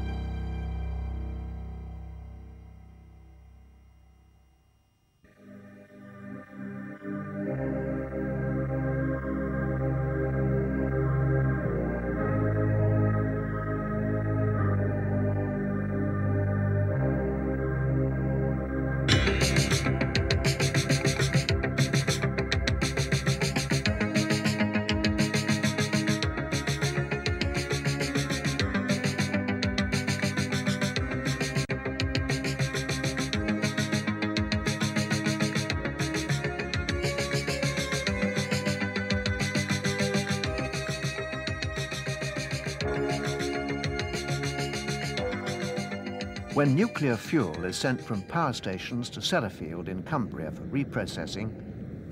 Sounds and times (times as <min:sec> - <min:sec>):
Music: 0:00.0 - 0:50.0.